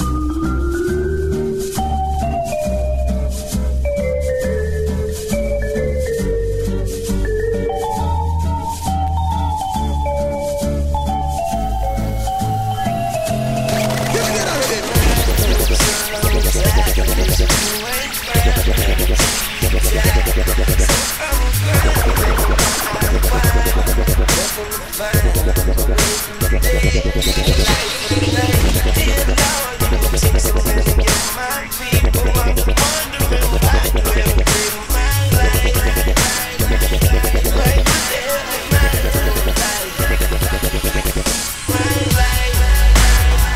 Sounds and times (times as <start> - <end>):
Dubstep: 0.0 - 43.5.